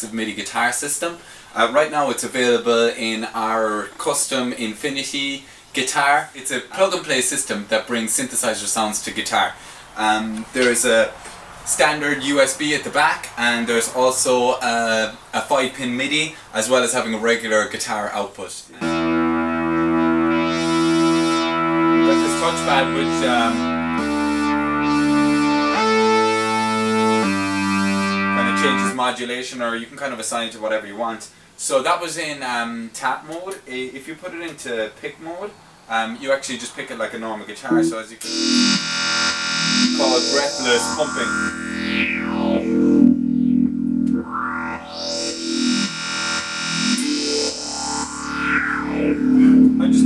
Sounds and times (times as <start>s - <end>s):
Speech: 0.0s - 18.9s, 22.0s - 23.6s, 28.4s - 38.4s, 40.0s - 41.4s, 49.4s - 50.0s
Guitar: 18.8s - 29.0s, 37.7s - 50.0s.